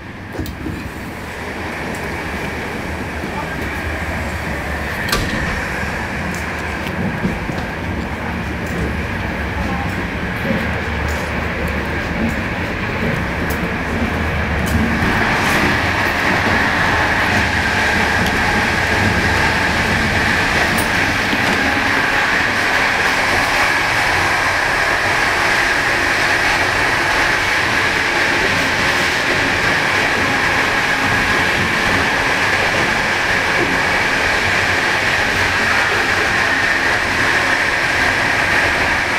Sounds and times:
Railroad car, train wagon: 0.0s - 39.1s
Train: 0.0s - 39.1s.

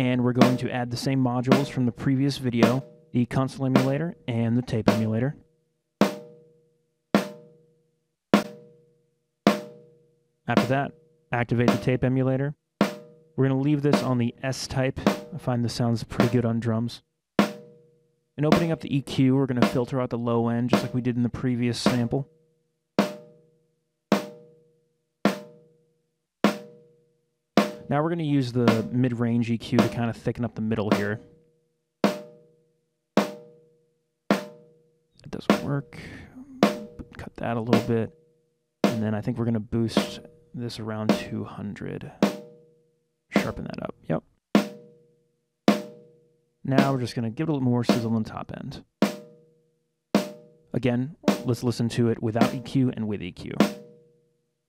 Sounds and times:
Snare drum: 0.0s - 0.7s, 1.5s - 1.8s, 2.6s - 2.9s, 3.8s - 4.0s, 11.6s - 12.0s, 13.8s - 14.2s, 20.7s - 21.1s, 21.9s - 22.1s, 28.6s - 29.0s, 29.7s - 30.2s, 35.4s - 35.8s, 36.5s - 38.0s, 39.9s - 40.3s, 43.4s - 43.7s, 46.7s - 47.1s, 51.2s - 52.8s.

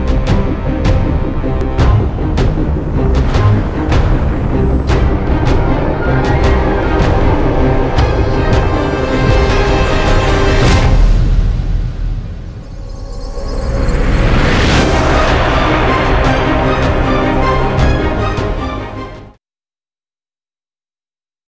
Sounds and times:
Theme music: 0.0s - 19.4s.

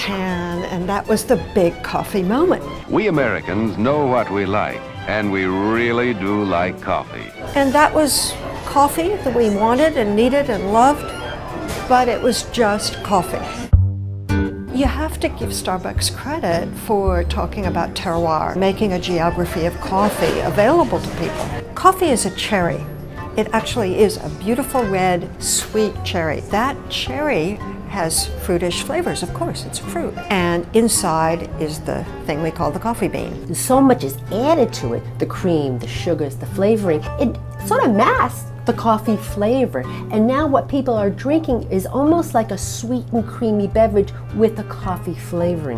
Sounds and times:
Speech: 0.0s - 11.2s, 11.8s - 13.6s, 14.7s - 45.7s
Music: 0.0s - 45.7s.

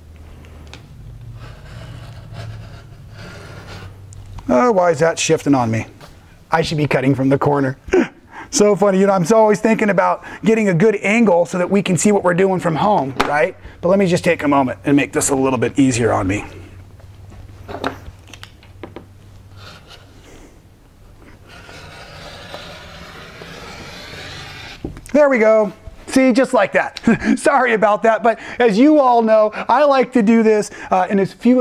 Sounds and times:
Speech: 4.5s - 7.8s, 8.5s - 16.6s, 25.1s - 31.6s.

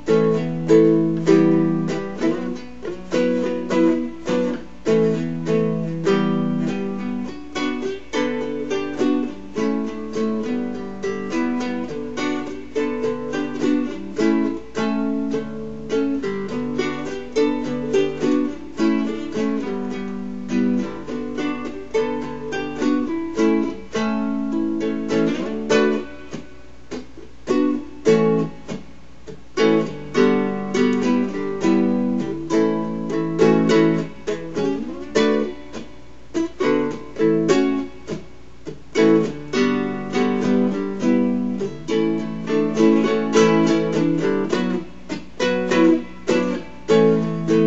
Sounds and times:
Ukulele: 0.0s - 47.6s.

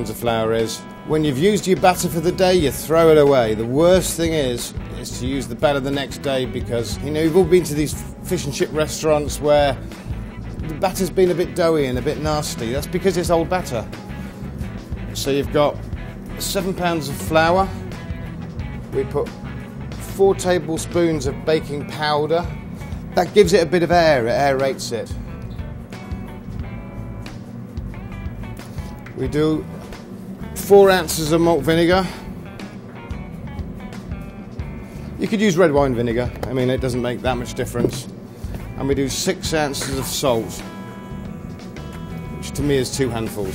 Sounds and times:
Speech: 0.0s - 9.8s, 10.6s - 13.9s, 15.1s - 15.8s, 16.4s - 17.8s, 18.9s - 19.4s, 20.0s - 22.5s, 23.2s - 25.2s, 29.2s - 29.7s, 30.6s - 32.2s, 35.2s - 38.1s, 38.8s - 40.7s, 42.4s - 43.5s
Music: 0.0s - 43.5s.

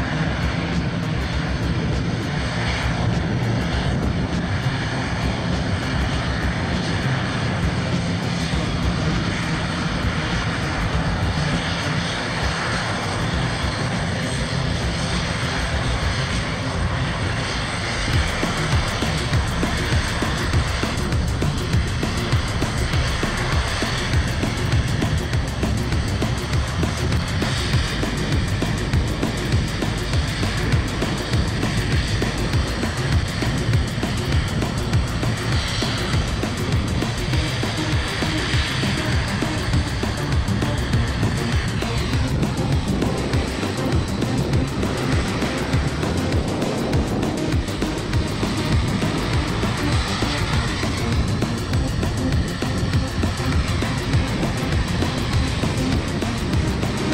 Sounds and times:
Fixed-wing aircraft, airplane: 0.0s - 57.1s
Music: 0.0s - 57.1s
Outside, urban or manmade: 0.0s - 57.1s.

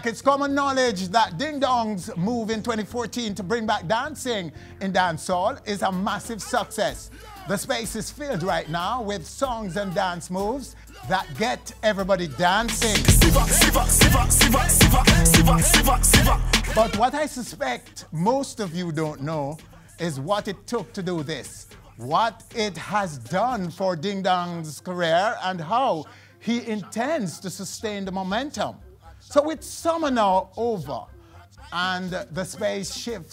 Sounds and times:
Speech: 0.0s - 13.5s, 16.7s - 33.3s.

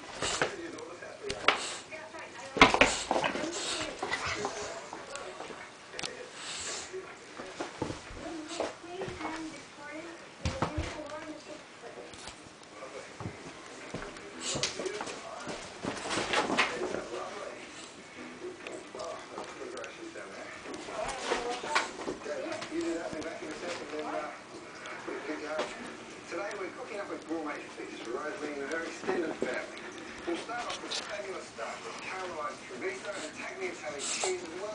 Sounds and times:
Speech: 0.3s - 15.6s, 18.5s - 34.7s.

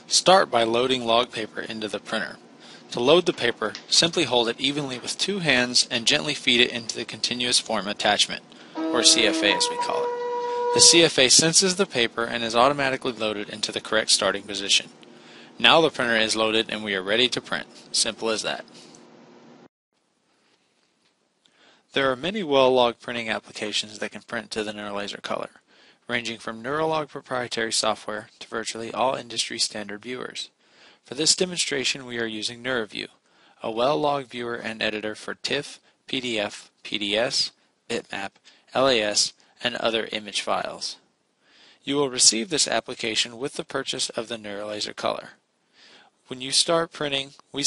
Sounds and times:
Speech: 0.0s - 10.1s, 10.7s - 15.0s, 15.6s - 18.7s, 21.9s - 41.1s, 41.8s - 45.4s, 46.3s - 47.6s.

